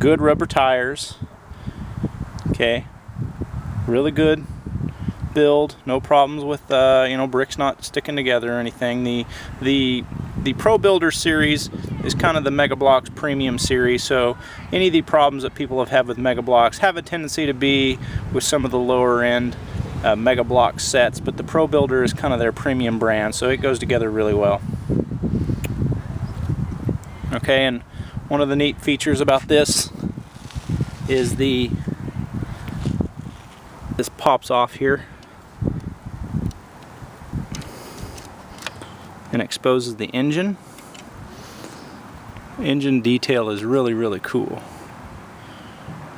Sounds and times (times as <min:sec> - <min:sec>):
Speech: 0:00.0 - 0:01.3, 0:02.5 - 0:02.9, 0:03.9 - 0:04.4, 0:05.4 - 0:24.6, 0:27.3 - 0:29.9, 0:31.1 - 0:31.8, 0:34.0 - 0:35.1, 0:39.3 - 0:40.6, 0:42.6 - 0:44.7.